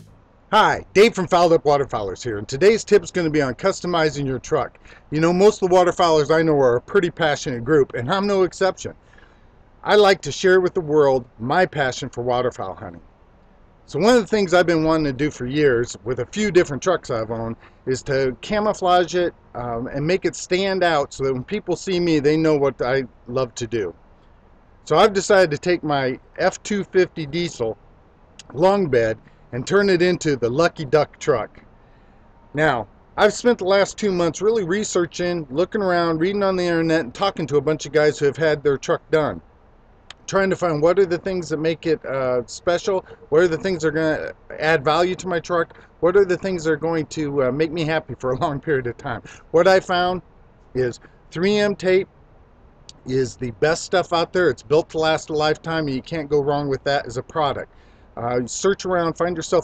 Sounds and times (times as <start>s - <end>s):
Speech: 0.0s - 9.0s, 9.8s - 13.0s, 13.9s - 24.0s, 24.9s - 27.8s, 28.4s - 31.6s, 32.6s - 39.4s, 40.1s - 50.2s, 50.8s - 52.1s, 52.9s - 59.6s.